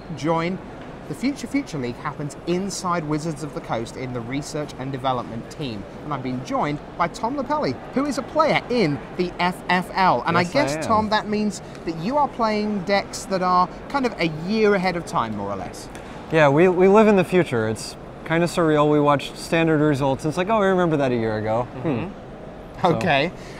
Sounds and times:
Speech: 0.2s - 22.1s, 22.8s - 23.3s.

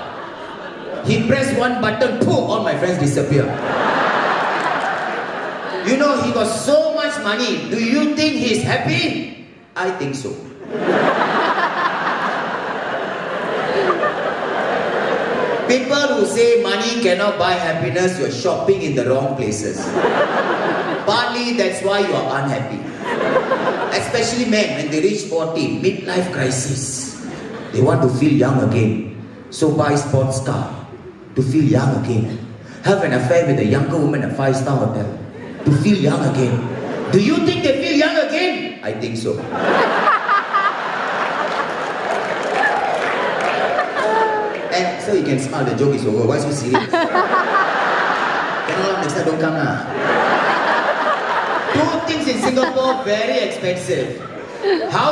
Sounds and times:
Snicker: 0.0s - 1.2s, 3.5s - 6.0s, 10.6s - 15.7s, 19.8s - 21.1s, 22.8s - 24.8s, 39.4s - 44.8s, 46.6s - 53.6s
Speech: 1.0s - 3.6s, 5.8s - 10.5s, 15.7s - 19.9s, 21.0s - 22.9s, 23.9s - 39.5s, 44.0s - 46.9s, 48.7s - 49.9s, 51.7s - 55.1s.

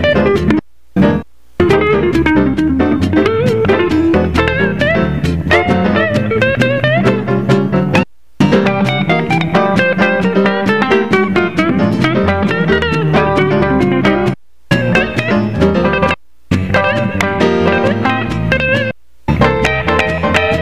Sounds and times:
Guitar: 0.0s - 20.6s
Jazz: 0.0s - 20.6s.

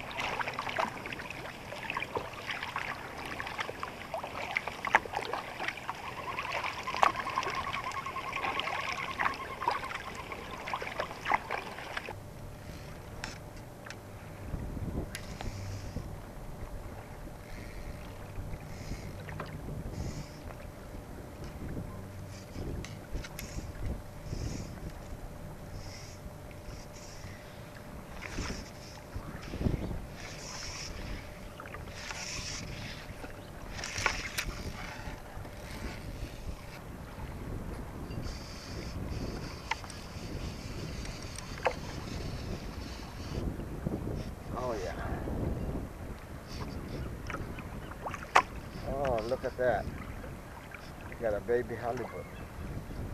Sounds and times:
Rowboat, canoe, kayak: 0.0s - 53.1s.

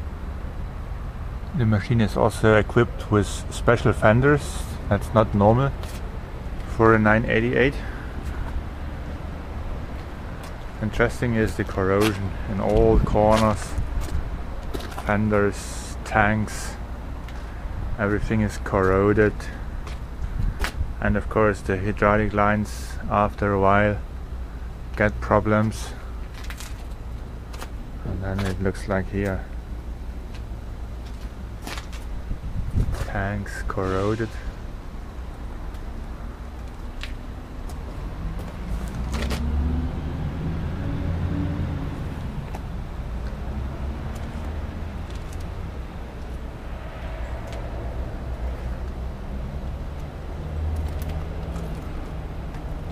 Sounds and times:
Speech: 1.5s - 5.8s, 6.7s - 8.0s, 10.8s - 13.8s, 15.0s - 16.8s, 18.0s - 19.6s, 21.0s - 24.0s, 25.0s - 26.0s, 28.0s - 29.5s, 33.0s - 34.5s.

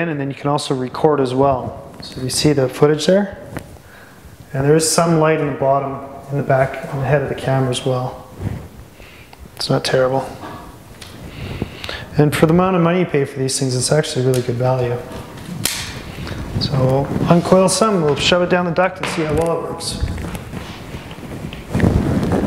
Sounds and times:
Speech: 0.0s - 3.4s, 4.5s - 8.3s, 9.6s - 10.5s, 12.1s - 15.1s, 16.6s - 20.1s.

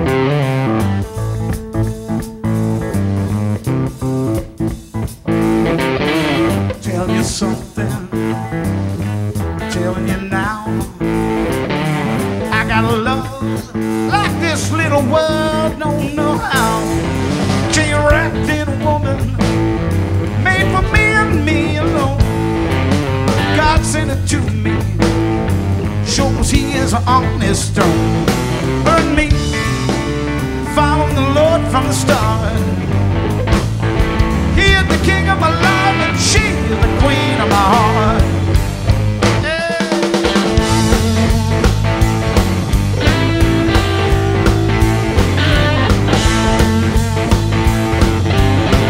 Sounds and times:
Music: 0.0s - 48.8s.

